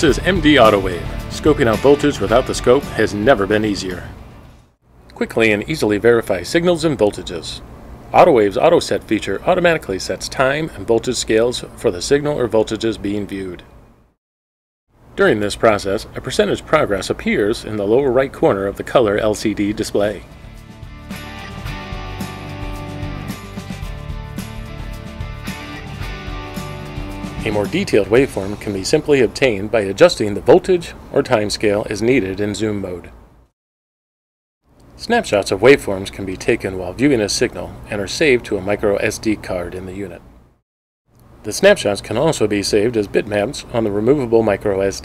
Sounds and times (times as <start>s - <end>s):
Music: 0.0s - 4.2s, 20.3s - 28.9s
Speech: 0.0s - 4.2s, 5.1s - 13.7s, 15.2s - 20.3s, 27.4s - 33.2s, 35.0s - 40.2s, 41.4s - 45.0s.